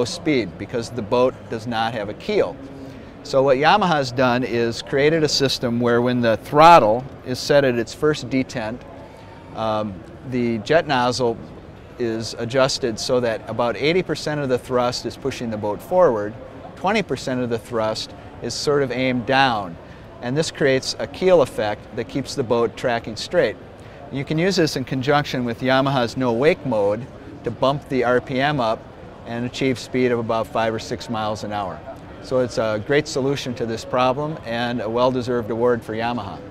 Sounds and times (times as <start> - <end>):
Speech: 0.0 - 2.6, 3.2 - 8.9, 9.5 - 11.4, 12.0 - 36.5.